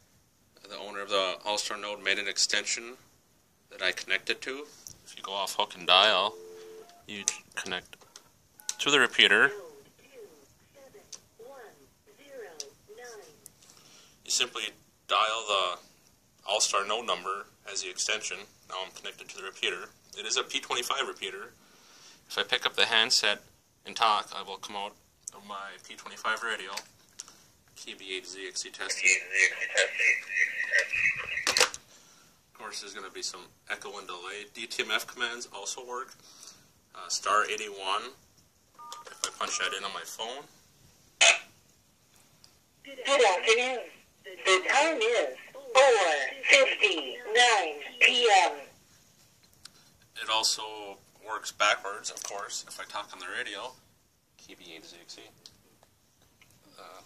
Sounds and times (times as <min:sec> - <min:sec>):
Telephone: 0:06.2 - 0:07.4, 0:29.1 - 0:31.8, 0:38.8 - 0:39.8.